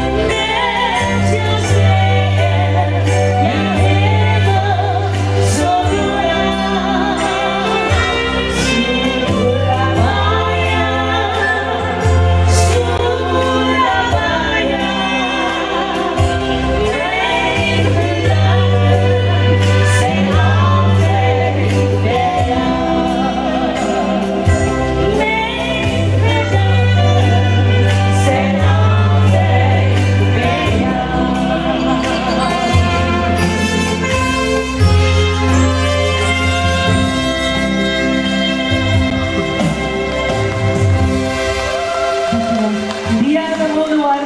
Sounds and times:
Singing: 0:00.0 - 0:40.7
Music of Latin America: 0:00.0 - 0:44.2.

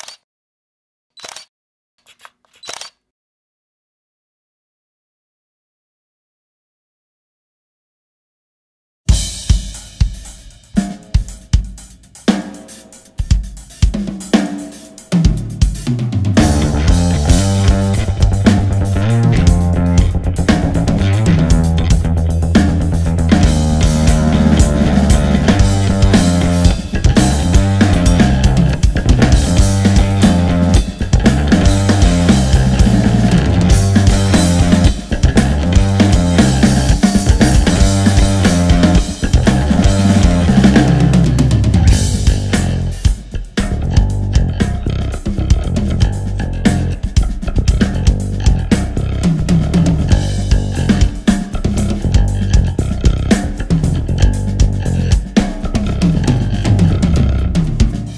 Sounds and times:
Hi-hat: 0:09.4 - 0:15.9.

